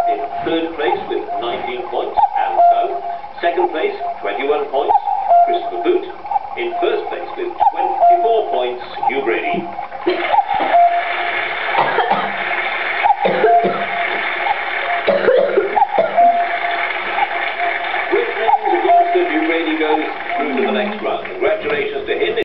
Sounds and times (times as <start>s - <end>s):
Speech: 0.0s - 9.8s, 18.2s - 22.4s.